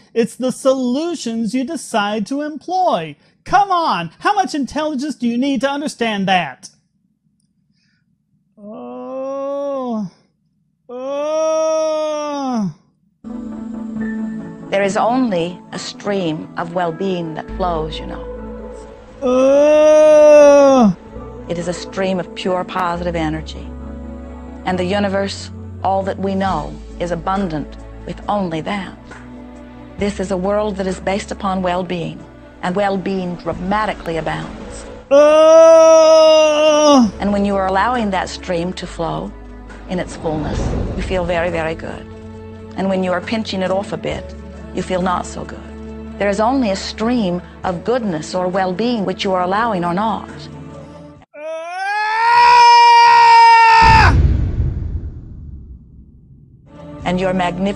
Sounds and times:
Music: 13.2s - 51.4s, 56.7s - 57.7s
Speech: 14.8s - 18.2s, 21.5s - 23.7s, 30.0s - 34.6s, 36.9s - 39.3s, 39.9s - 42.0s, 42.8s - 50.5s, 57.0s - 57.7s.

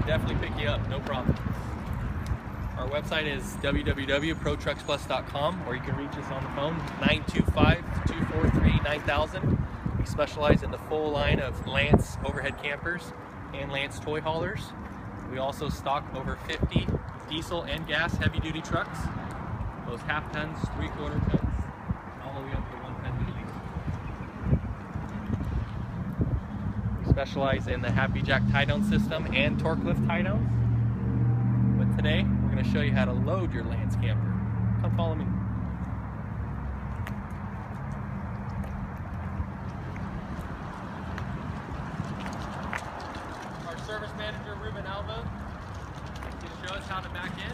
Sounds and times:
Speech: 0.0s - 1.4s, 2.8s - 19.1s, 19.9s - 21.5s, 22.2s - 23.6s, 27.0s - 30.4s, 31.8s - 35.3s, 43.6s - 45.3s, 46.3s - 47.5s.

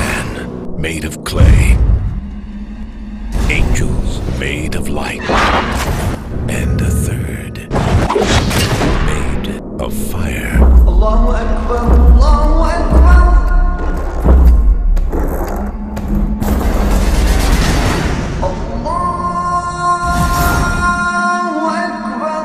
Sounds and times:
Speech: 0.0s - 1.8s, 3.4s - 5.3s, 6.5s - 7.7s, 8.8s - 11.6s
Music: 0.0s - 22.4s.

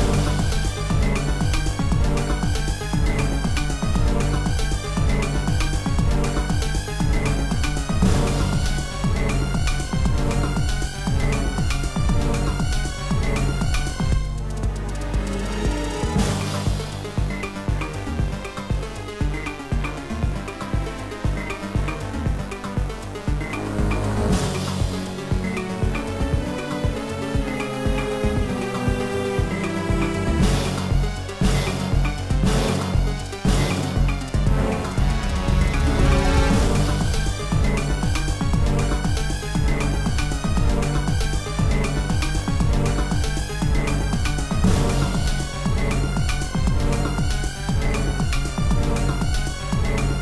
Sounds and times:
Music: 0.0s - 50.2s.

